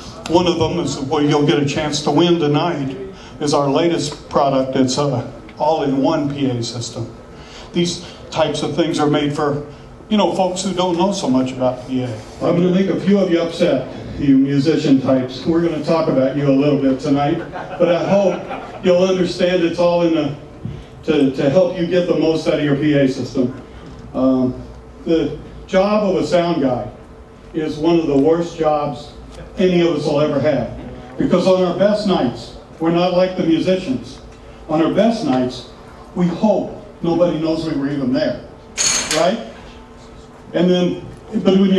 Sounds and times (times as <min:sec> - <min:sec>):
Speech: 0:00.0 - 0:20.4, 0:21.0 - 0:38.5, 0:39.1 - 0:39.6, 0:40.5 - 0:41.7.